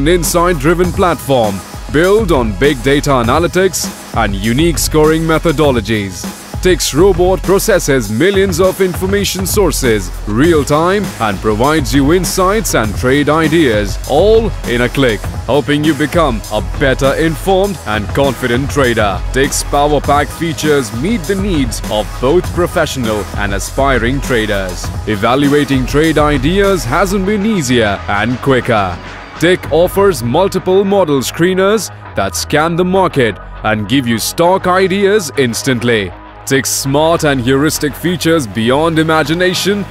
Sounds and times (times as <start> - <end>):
Music: 0.0 - 39.9
Speech: 0.0 - 39.9.